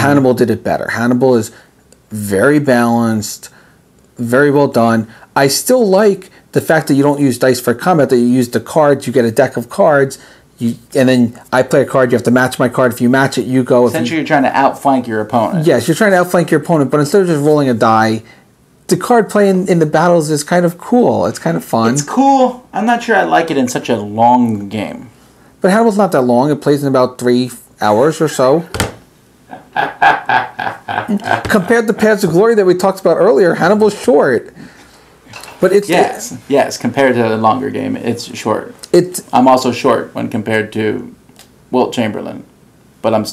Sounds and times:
Speech: 35.6s - 43.3s.

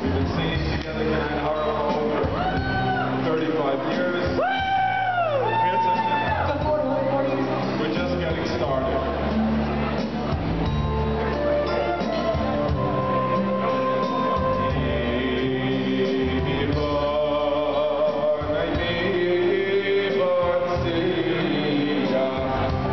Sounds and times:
Speech: 0.0s - 4.4s, 5.6s - 10.3s
Music: 0.0s - 22.9s.

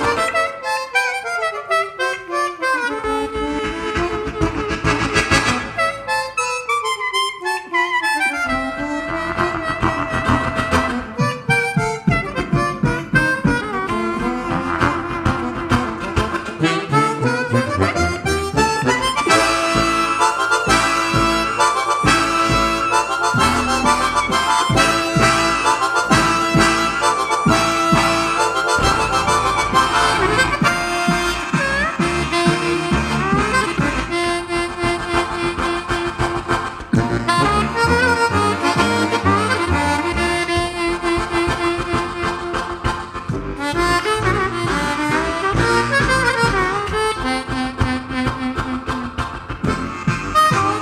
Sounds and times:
Harmonica: 0.0s - 50.8s
Wind instrument, woodwind instrument: 0.0s - 50.8s.

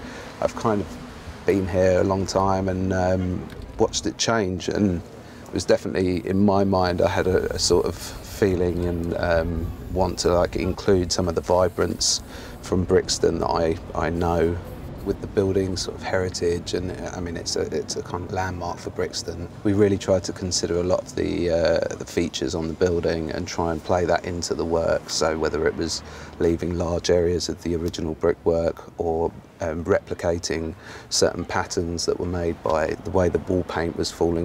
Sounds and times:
Speech: 0.4s - 34.4s
Spray: 11.3s - 12.7s.

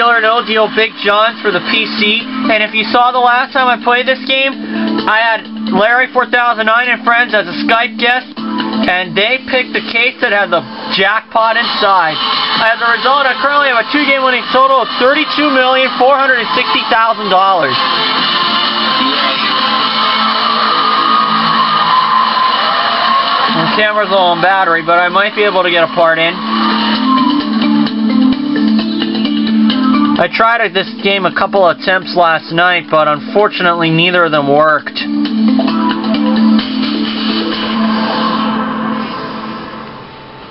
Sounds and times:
Speech: 0.0s - 8.3s, 8.9s - 17.8s, 23.5s - 26.4s, 30.2s - 35.1s
Music: 0.0s - 40.5s.

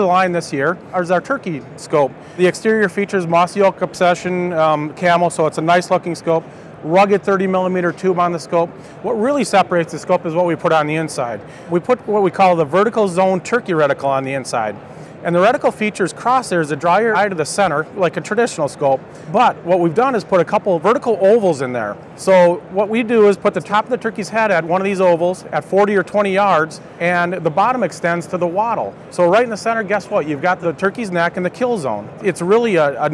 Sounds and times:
Speech: 0.0s - 33.1s.

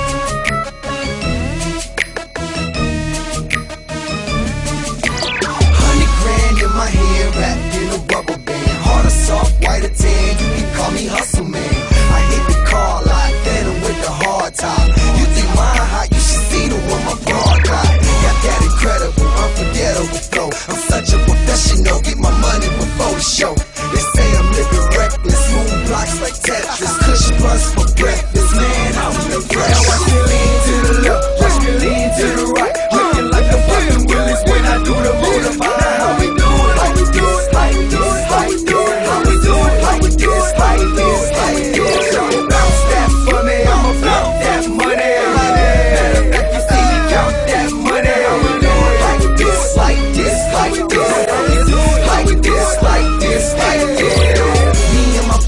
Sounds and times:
Dance music: 0.0s - 55.4s
Pop music: 0.0s - 55.4s
Ska: 4.8s - 55.4s.

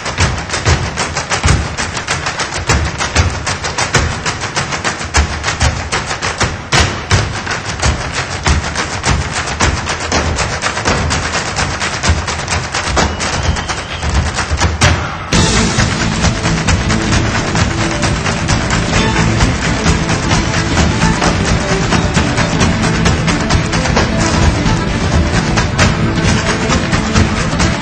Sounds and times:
Music: 0.0s - 27.8s.

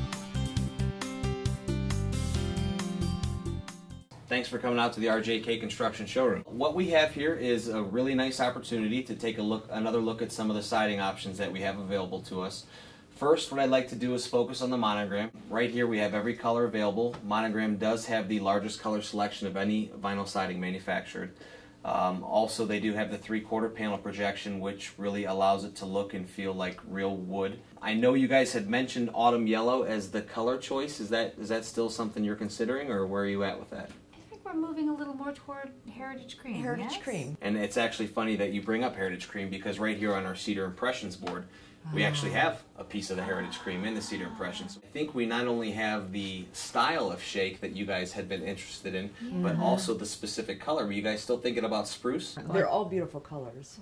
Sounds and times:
Speech: 4.3s - 21.3s, 21.9s - 53.8s.

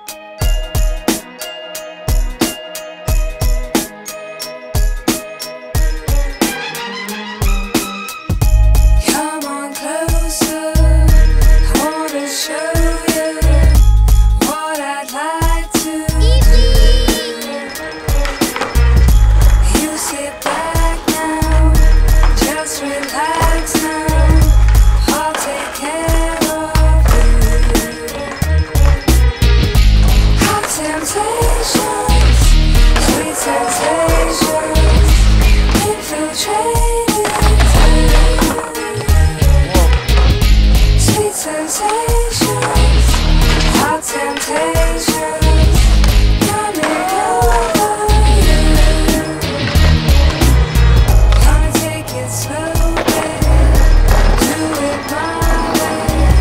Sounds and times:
Music: 0.0s - 56.4s
Skateboard: 15.7s - 56.4s.

